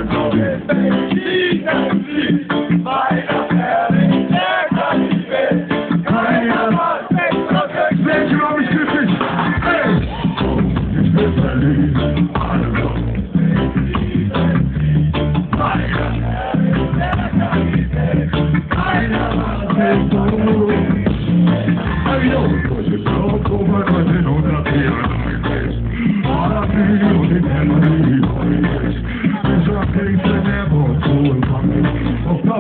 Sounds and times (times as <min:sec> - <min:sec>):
Music: 0:00.0 - 0:32.6.